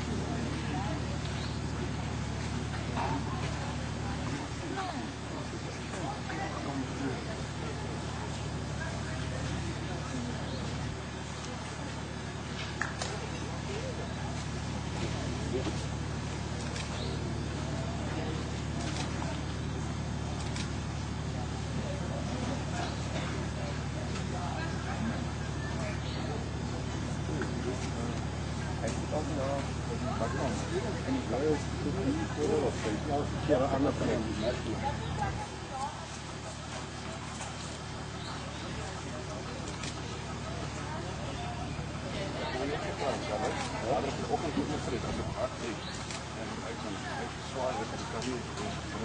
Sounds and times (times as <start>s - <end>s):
Speech: 0.0s - 49.0s.